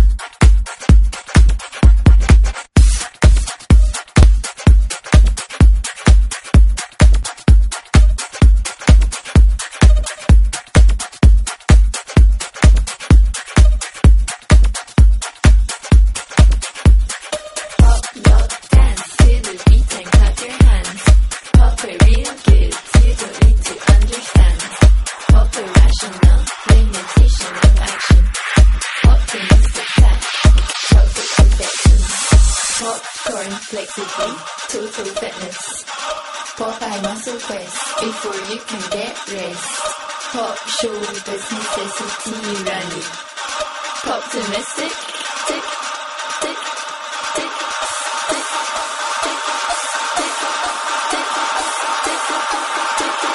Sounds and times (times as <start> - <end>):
Music: 0.0 - 53.3.